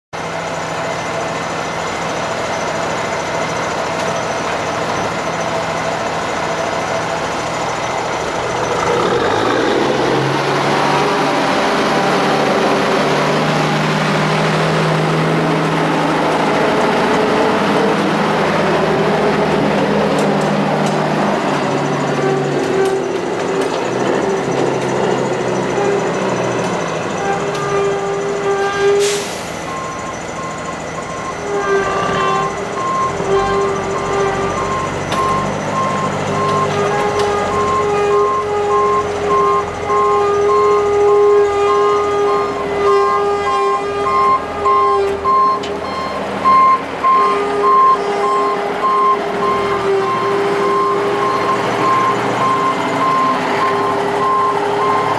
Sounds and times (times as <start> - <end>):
Truck: 0.1 - 55.1.